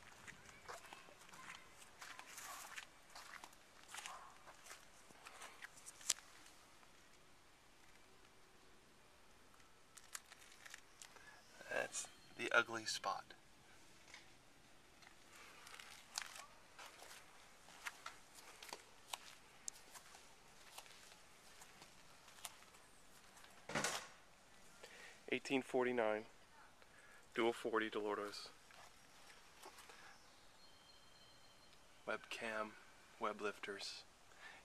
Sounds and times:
Speech: 0:11.6 - 0:13.4, 0:25.3 - 0:26.7, 0:27.4 - 0:28.6, 0:32.1 - 0:34.1.

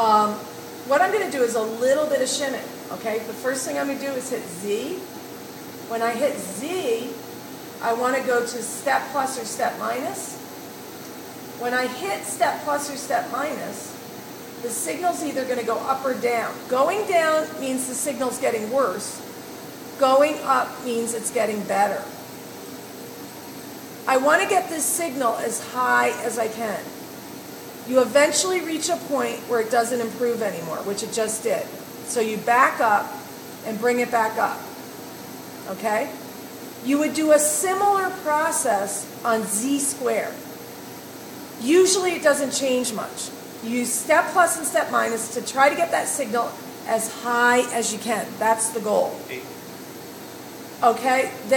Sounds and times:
Speech: 0:00.0 - 0:05.1, 0:05.9 - 0:07.2, 0:07.8 - 0:10.4, 0:11.6 - 0:14.0, 0:14.6 - 0:19.2, 0:20.0 - 0:22.1, 0:24.1 - 0:26.9, 0:27.9 - 0:34.7, 0:36.9 - 0:40.4, 0:41.6 - 0:49.5, 0:50.8 - 0:51.5.

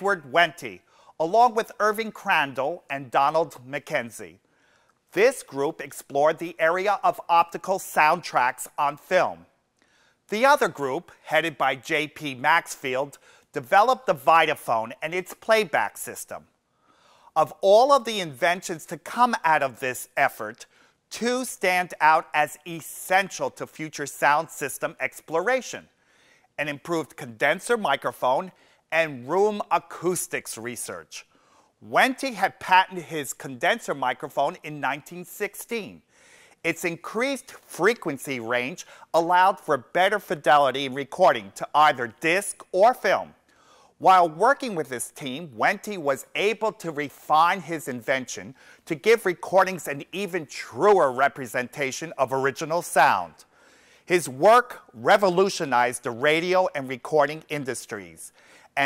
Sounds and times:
Speech: 0:00.0 - 0:04.4, 0:05.1 - 0:09.5, 0:10.3 - 0:16.5, 0:17.4 - 0:25.9, 0:26.6 - 0:36.0, 0:36.6 - 0:43.4, 0:44.0 - 0:53.5, 0:54.1 - 0:58.8.

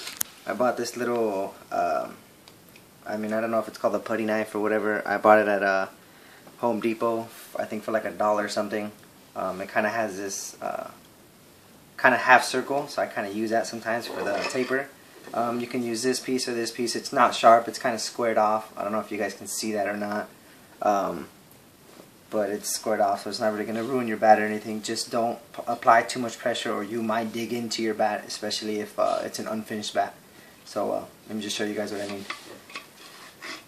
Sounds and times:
Speech: 0:00.4 - 0:02.2, 0:03.0 - 0:06.0, 0:06.6 - 0:11.0, 0:12.0 - 0:21.4, 0:22.3 - 0:32.5.

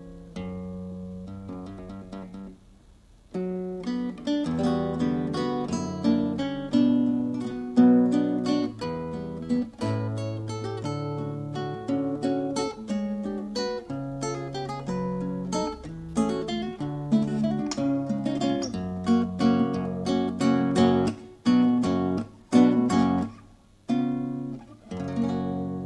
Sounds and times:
Acoustic guitar: 0:00.0 - 0:25.8.

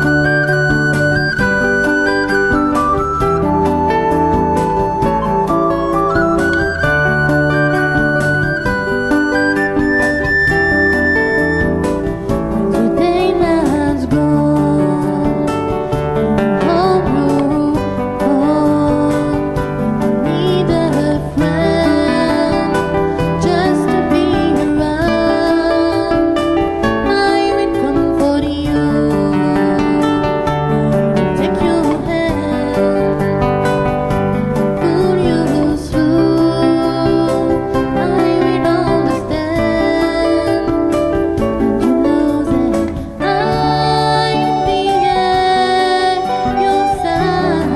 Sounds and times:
Soul music: 0:00.0 - 0:47.7.

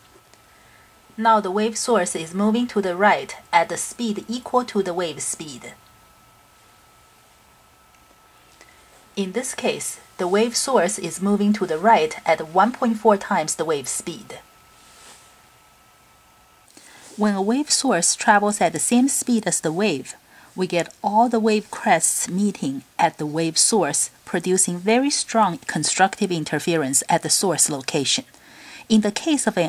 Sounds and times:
Speech: 0:01.2 - 0:05.8, 0:09.2 - 0:14.5, 0:17.2 - 0:28.3, 0:28.9 - 0:29.6.

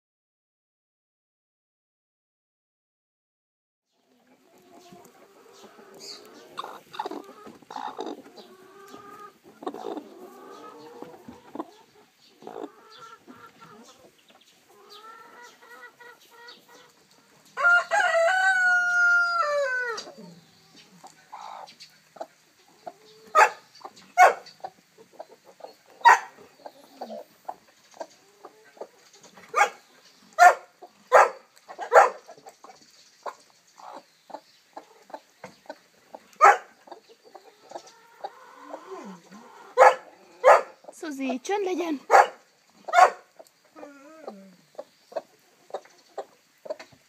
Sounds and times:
Bird: 0:03.9 - 0:17.6, 0:19.8 - 0:41.0
Chicken, rooster: 0:04.0 - 0:40.9, 0:42.1 - 0:47.0.

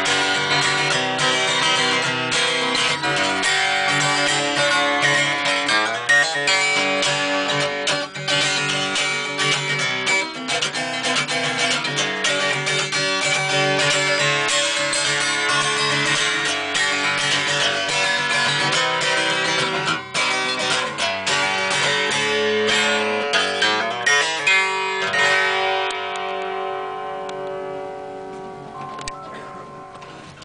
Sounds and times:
Strum: 0:00.0 - 0:30.4.

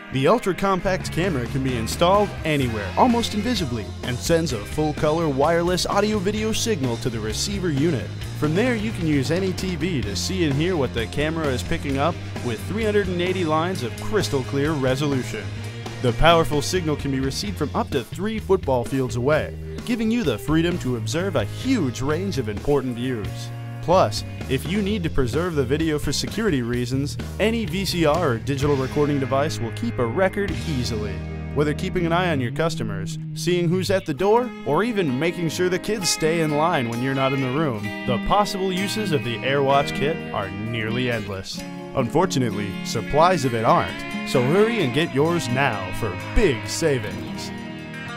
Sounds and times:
Music: 0:00.0 - 0:48.1
Speech: 0:00.1 - 0:47.5.

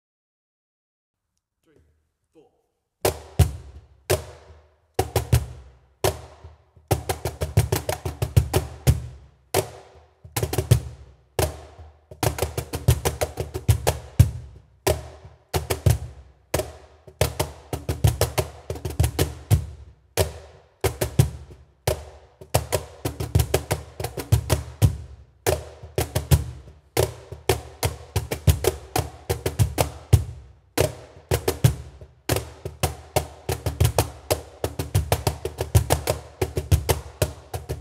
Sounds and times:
Percussion: 0:03.0 - 0:37.8.

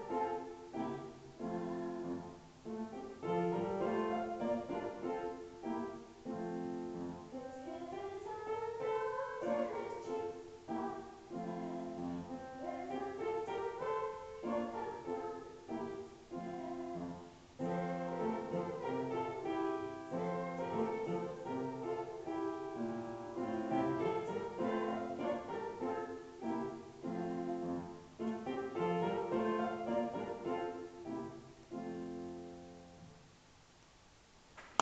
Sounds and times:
Female singing: 0:00.0 - 0:02.3, 0:07.4 - 0:22.5, 0:23.4 - 0:30.7
Music: 0:00.0 - 0:33.3.

